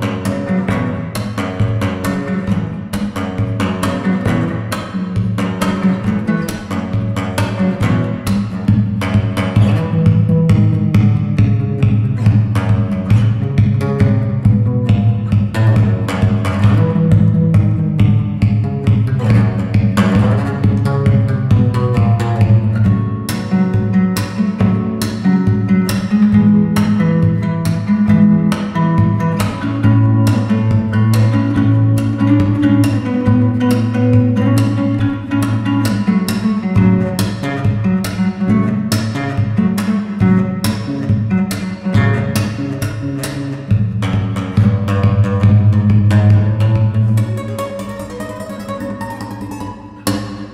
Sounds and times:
Guitar: 0.0s - 50.5s.

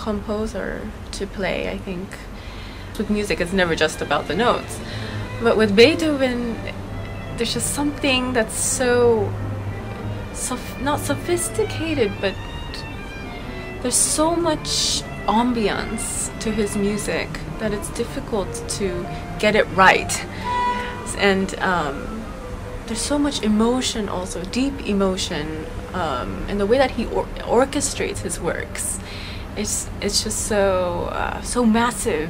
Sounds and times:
Speech: 0.0s - 2.4s, 3.0s - 6.7s, 7.4s - 9.3s, 10.4s - 12.8s, 13.8s - 20.4s, 21.0s - 22.3s, 22.9s - 32.2s
Music: 0.0s - 32.2s.

